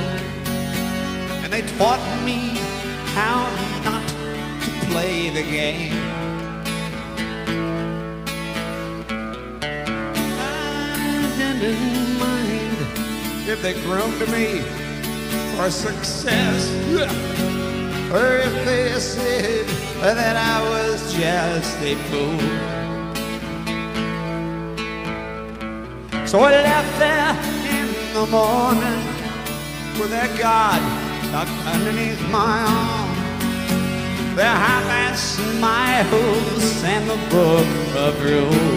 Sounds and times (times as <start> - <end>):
Music: 0.0 - 38.7.